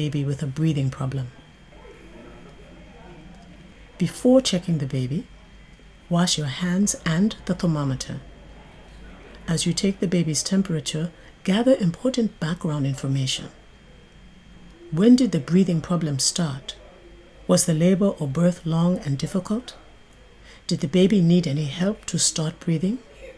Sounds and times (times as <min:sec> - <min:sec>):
Speech: 0:00.0 - 0:13.6, 0:14.7 - 0:23.3.